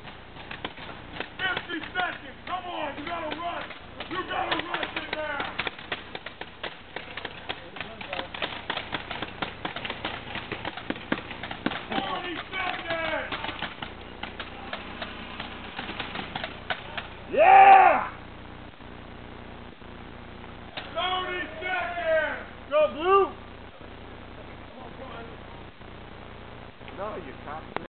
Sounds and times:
Speech: 0:11.9 - 0:13.4, 0:26.9 - 0:27.9.

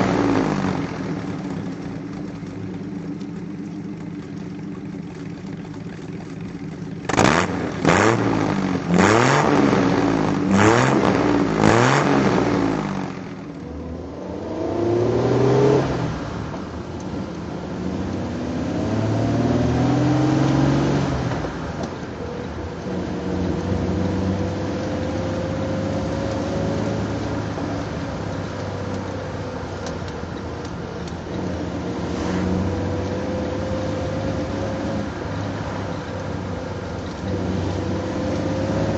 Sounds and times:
Vehicle: 0:00.0 - 0:38.9.

